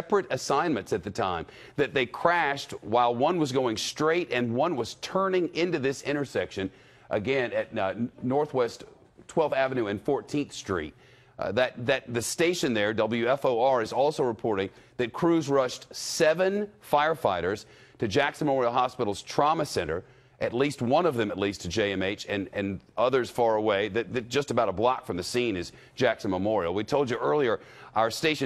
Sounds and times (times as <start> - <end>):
Speech: 0.0 - 28.4.